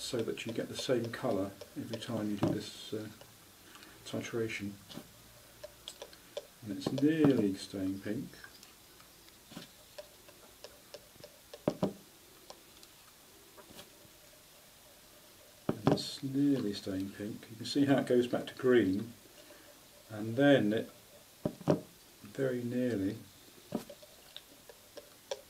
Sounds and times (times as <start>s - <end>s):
Speech: 0.0s - 3.2s, 4.0s - 4.8s, 6.6s - 8.5s, 15.8s - 19.2s, 20.1s - 20.9s, 22.2s - 23.3s.